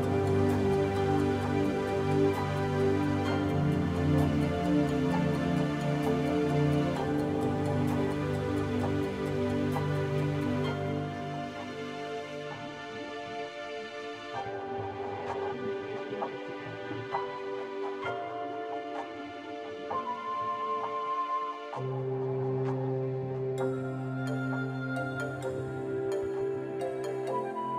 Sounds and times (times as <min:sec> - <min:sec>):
Music: 0:00.0 - 0:27.7.